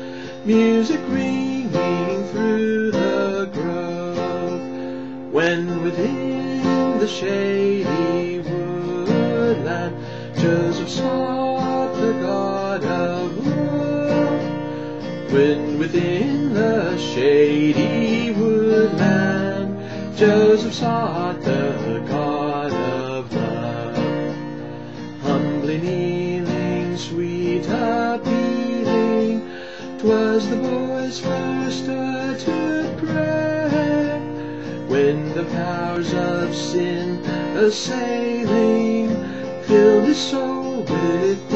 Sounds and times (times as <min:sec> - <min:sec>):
Acoustic guitar: 0:00.0 - 0:41.5
Strum: 0:00.0 - 0:41.5.